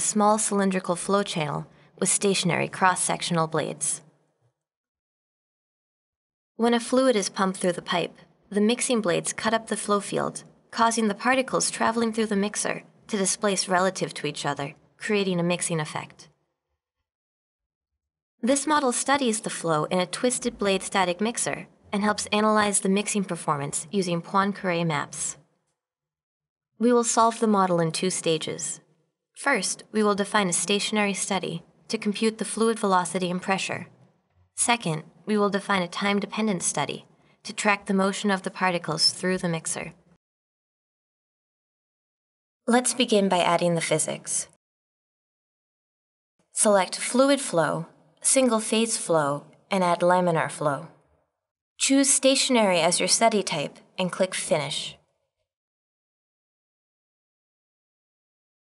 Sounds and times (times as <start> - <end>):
Speech: 0.0 - 4.0, 6.6 - 16.2, 18.4 - 25.4, 26.8 - 28.8, 29.4 - 33.9, 34.6 - 40.0, 42.7 - 44.6, 46.6 - 50.9, 51.8 - 55.0.